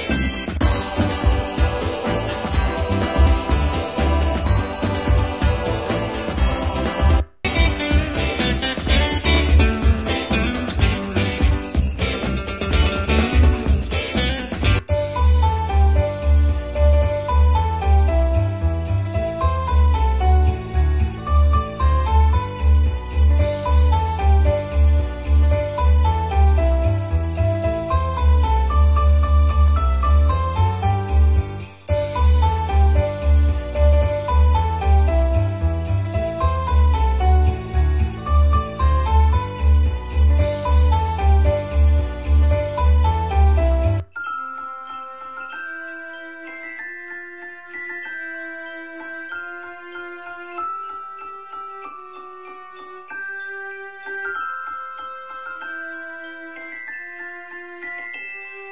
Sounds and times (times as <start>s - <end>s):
Christmas music: 0.0s - 58.7s.